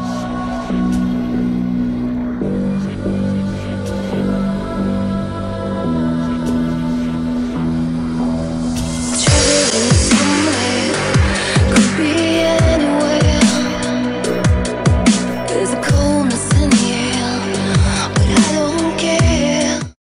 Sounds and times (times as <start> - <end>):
Dubstep: 8.7 - 19.8.